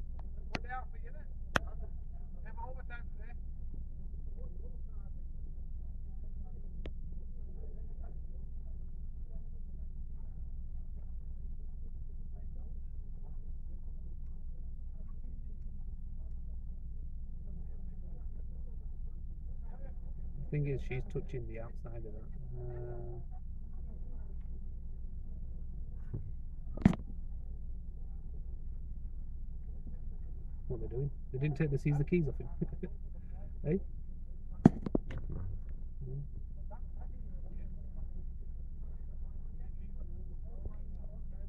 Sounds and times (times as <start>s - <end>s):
Speech: 0.0s - 3.5s, 4.1s - 24.8s, 29.7s - 33.9s, 34.5s - 41.4s.